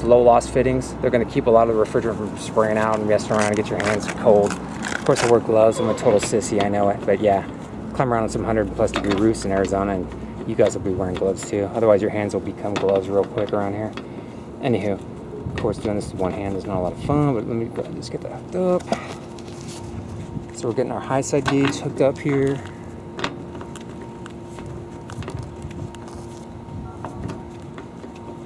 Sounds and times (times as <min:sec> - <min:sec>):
Speech: 0:00.0 - 0:14.0, 0:14.6 - 0:15.0, 0:15.6 - 0:19.0, 0:20.6 - 0:22.7.